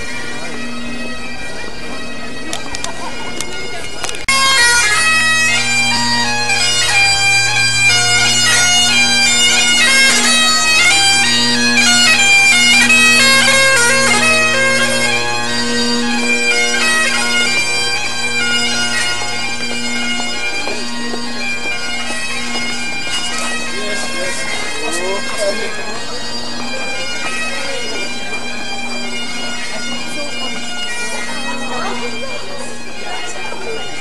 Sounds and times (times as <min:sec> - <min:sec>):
Bagpipes: 0:00.0 - 0:34.0
Wind instrument, woodwind instrument: 0:00.0 - 0:34.0.